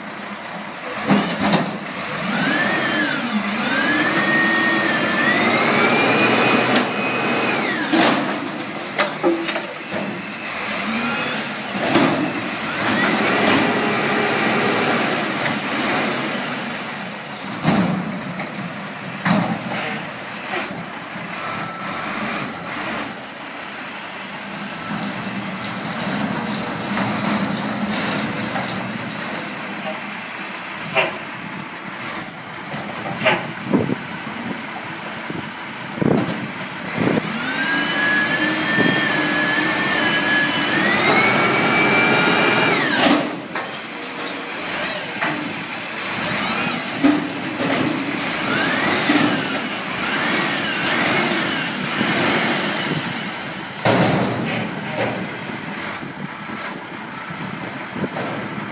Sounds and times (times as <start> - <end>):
Outside, urban or manmade: 0.0 - 58.7
Truck: 0.0 - 58.7.